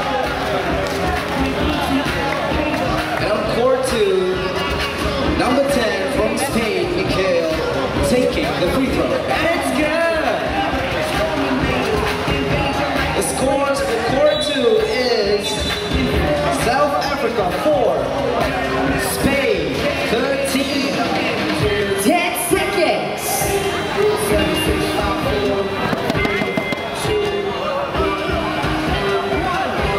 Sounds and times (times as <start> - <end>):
Music: 0.0 - 29.9
Speech: 1.6 - 12.0, 12.6 - 23.7
Basketball bounce: 25.8 - 26.9.